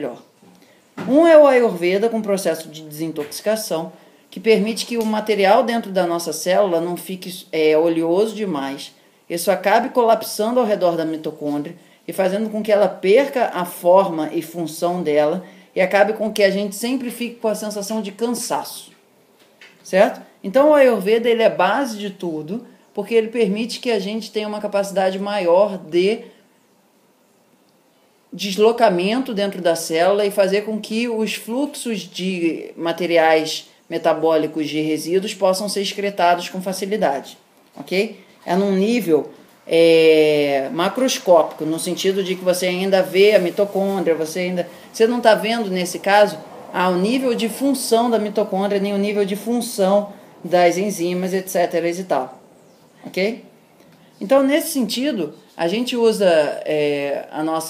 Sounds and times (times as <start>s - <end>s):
Speech: 0.0s - 0.3s, 1.0s - 19.0s, 19.8s - 26.3s, 28.4s - 52.4s, 53.0s - 53.5s, 54.2s - 57.7s
Inside, small room: 0.0s - 57.7s.